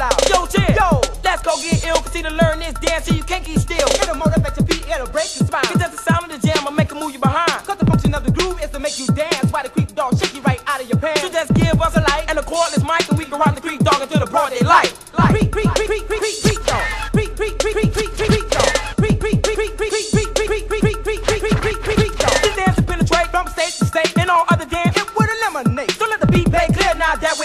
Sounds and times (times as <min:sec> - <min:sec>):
Music: 0:00.0 - 0:27.4.